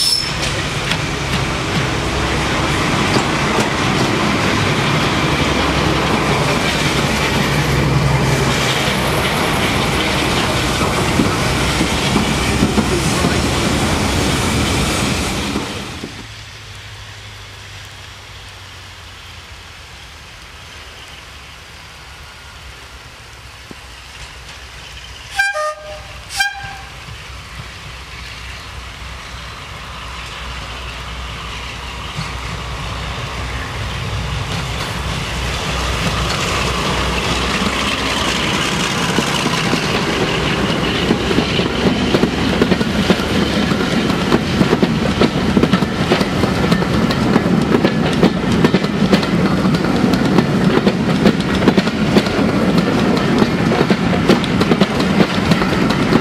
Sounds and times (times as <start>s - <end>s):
Railroad car, train wagon: 0.0s - 56.2s
Train: 0.0s - 56.2s.